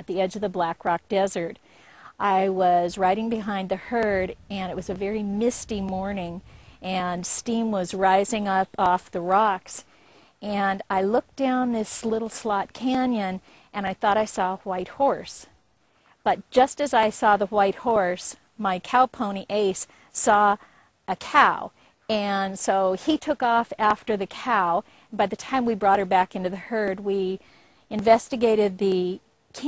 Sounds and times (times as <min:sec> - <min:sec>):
Speech: 0:00.0 - 0:09.8, 0:10.4 - 0:15.5, 0:16.3 - 0:29.6.